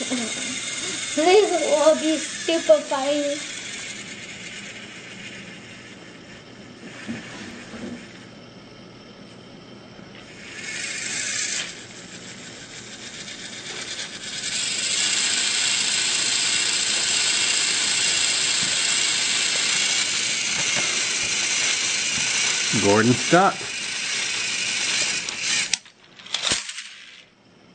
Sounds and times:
Inside, small room: 0.0 - 27.7.

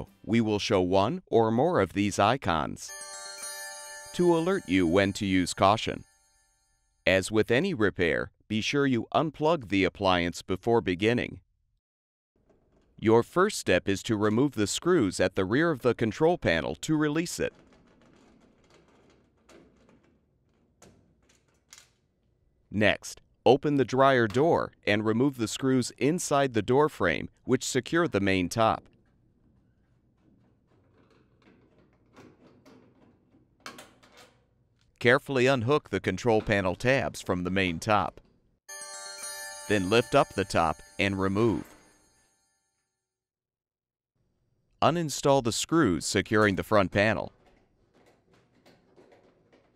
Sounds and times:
Speech: 0.0 - 2.9, 4.2 - 6.0, 7.1 - 11.4, 13.0 - 17.5, 22.7 - 28.9, 35.0 - 38.2, 39.7 - 41.7, 44.8 - 47.3.

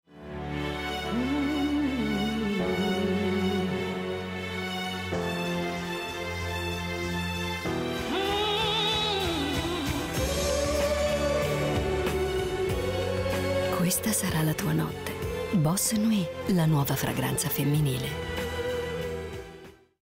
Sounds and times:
Music: 0.1 - 20.0
Speech: 13.8 - 18.2.

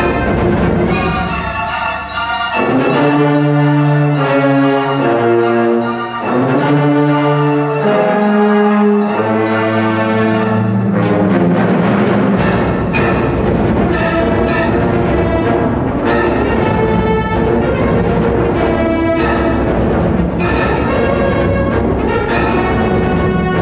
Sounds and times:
Music: 0.0 - 23.6.

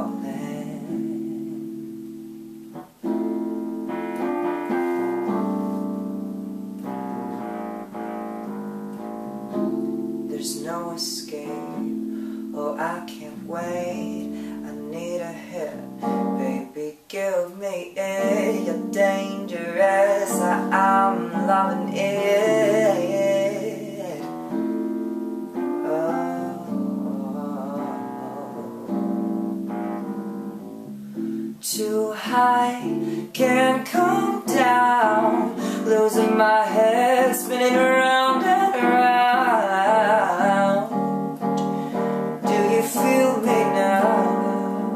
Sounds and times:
Keyboard (musical): 0.0 - 44.9.

